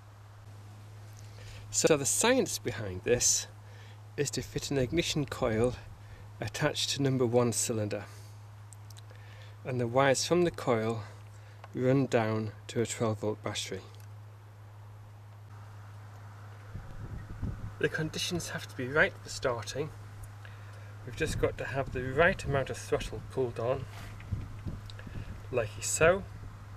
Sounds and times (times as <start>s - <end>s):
Speech: 1.7s - 3.5s, 4.2s - 5.8s, 6.4s - 8.2s, 9.7s - 11.1s, 11.8s - 14.0s, 17.8s - 20.0s, 21.1s - 23.9s, 25.5s - 26.3s.